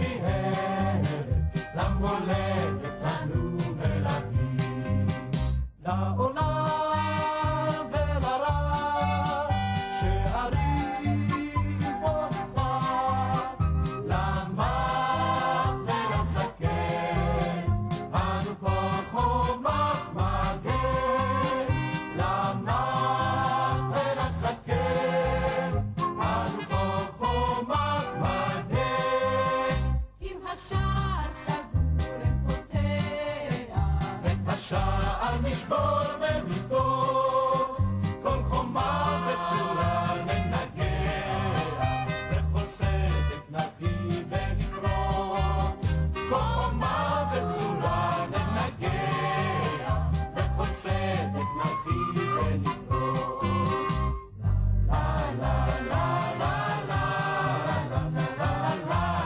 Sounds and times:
Choir: 0.0s - 5.0s, 5.8s - 54.2s, 54.9s - 59.2s
Soul music: 0.0s - 59.2s.

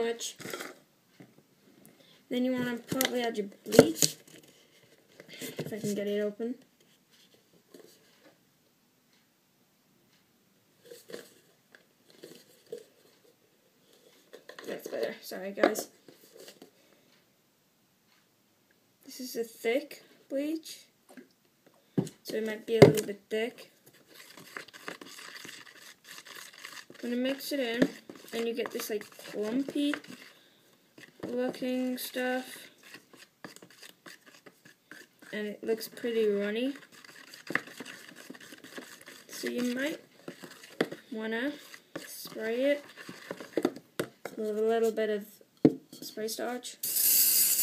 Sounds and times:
Speech: 0.0s - 0.4s, 2.3s - 4.2s, 5.7s - 6.7s, 14.6s - 16.0s, 19.1s - 21.0s, 22.2s - 23.7s, 27.0s - 30.0s, 31.3s - 32.7s, 35.3s - 36.8s, 39.3s - 40.0s, 41.1s - 42.8s, 44.3s - 45.4s, 46.0s - 46.8s.

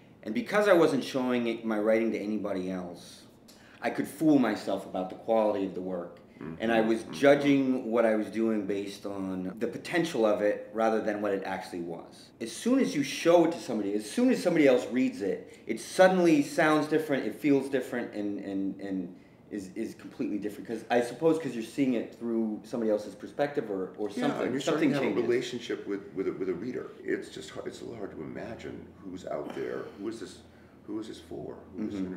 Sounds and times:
Speech: 0.2s - 32.1s.

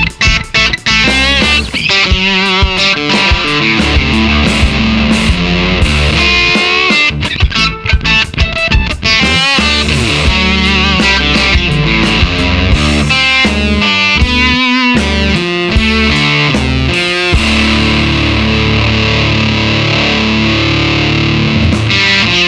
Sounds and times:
Guitar: 0.0s - 22.4s.

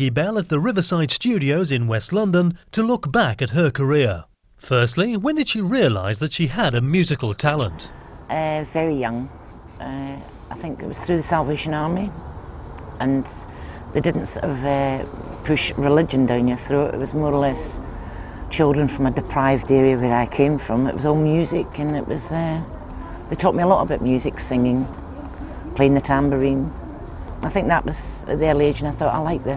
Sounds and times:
Speech: 0.0s - 12.2s, 13.0s - 17.8s, 18.5s - 24.9s, 25.7s - 26.8s, 27.4s - 29.5s.

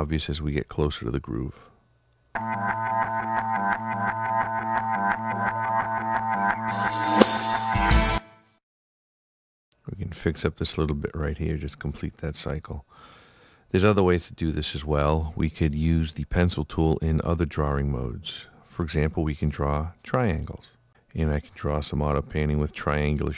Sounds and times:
Speech: 0.0s - 1.8s, 9.8s - 12.9s, 13.7s - 23.3s
Music: 2.4s - 8.6s.

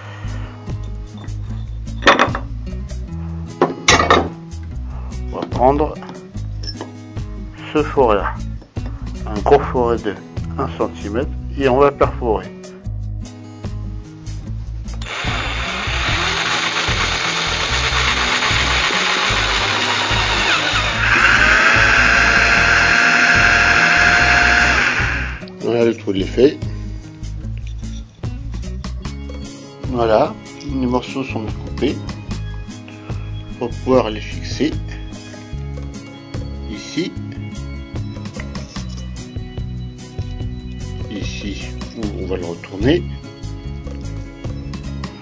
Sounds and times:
Music: 0.0s - 45.2s.

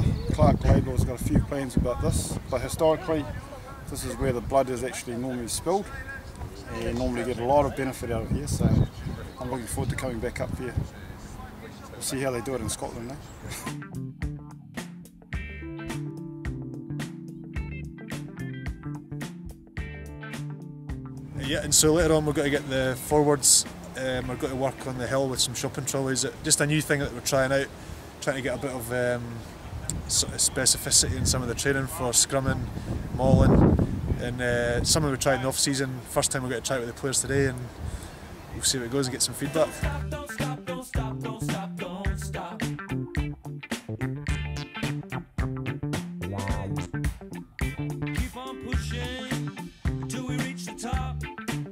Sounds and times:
Speech: 0.0s - 13.8s, 21.4s - 32.6s, 33.2s - 33.6s, 34.2s - 37.7s, 38.5s - 39.9s, 46.3s - 46.9s
Music: 13.5s - 25.6s, 39.4s - 51.7s.

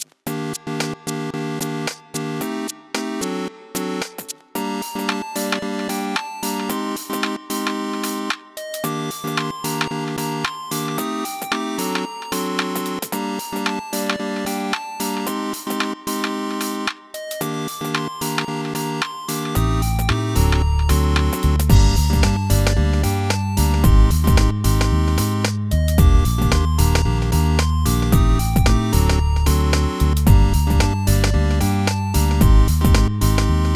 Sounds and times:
Music: 0.0s - 33.7s.

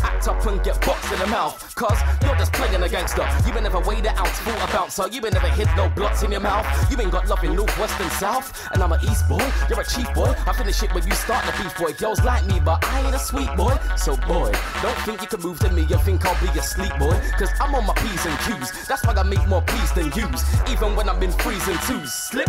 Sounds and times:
Music: 0.0s - 22.4s
Rapping: 0.0s - 22.4s.

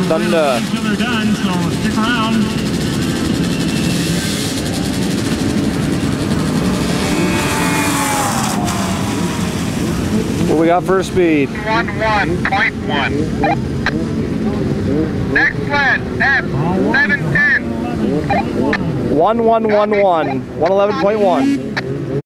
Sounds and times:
Speech: 15.4s - 21.5s.

